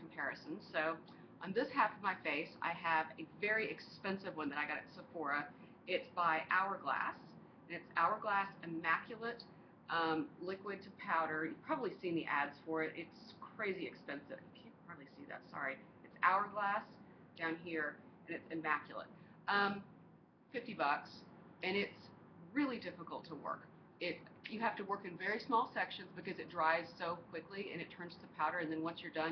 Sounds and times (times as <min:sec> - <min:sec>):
Speech: 0:00.0 - 0:19.9, 0:20.5 - 0:29.3.